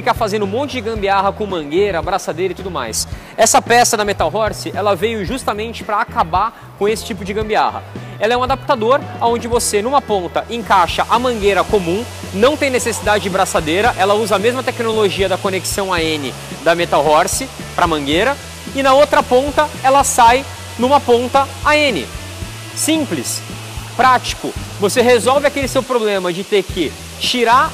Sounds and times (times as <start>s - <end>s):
Speech: 0.0s - 22.2s, 22.8s - 23.4s, 24.0s - 27.7s
Music: 0.0s - 27.7s.